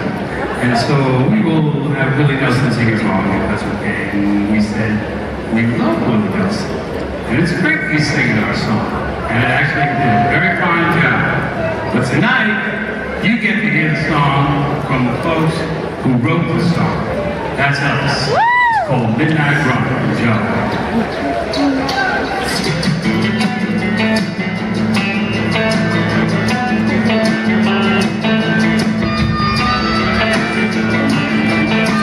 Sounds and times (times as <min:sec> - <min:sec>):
Speech: 0:00.0 - 0:22.8.